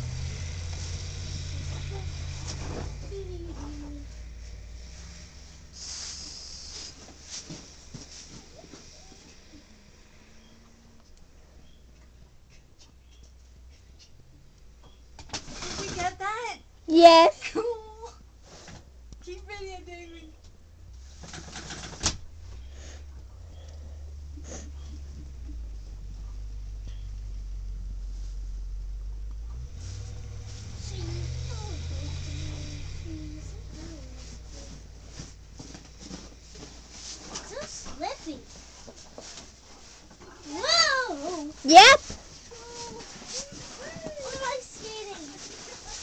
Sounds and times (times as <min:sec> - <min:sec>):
Vehicle: 0:00.0 - 0:46.0.